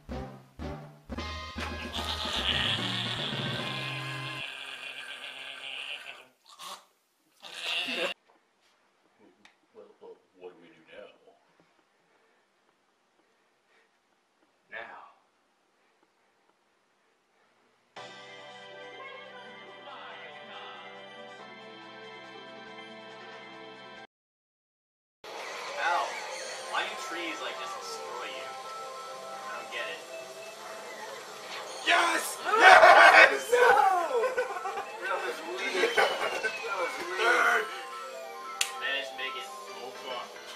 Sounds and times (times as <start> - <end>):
Music: 0.0 - 4.4, 18.0 - 24.1, 25.3 - 40.5.